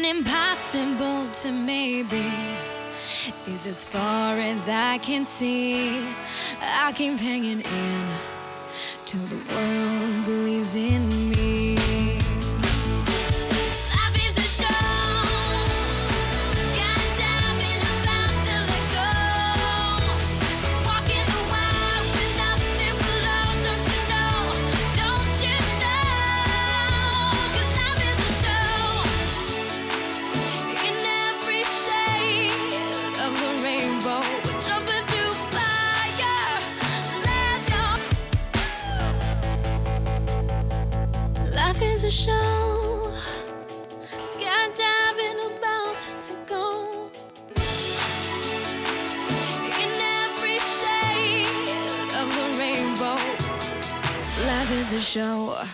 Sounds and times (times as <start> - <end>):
Music: 0.0 - 55.7.